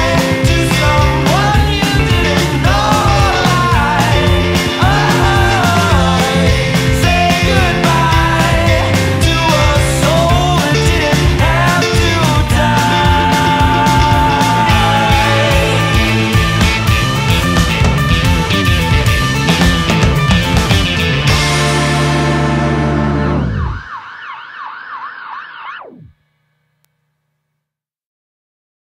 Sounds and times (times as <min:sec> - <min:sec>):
Music: 0:00.0 - 0:24.0
Police car (siren): 0:23.4 - 0:26.1.